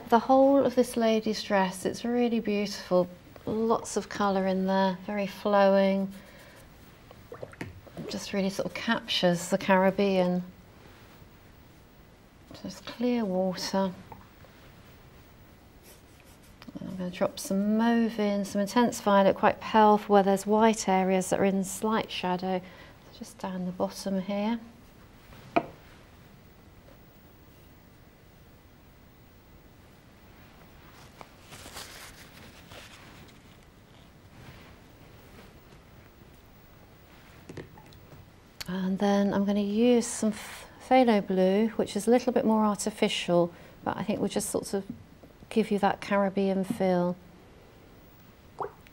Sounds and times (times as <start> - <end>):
Water: 7.1 - 8.9, 48.6 - 48.9.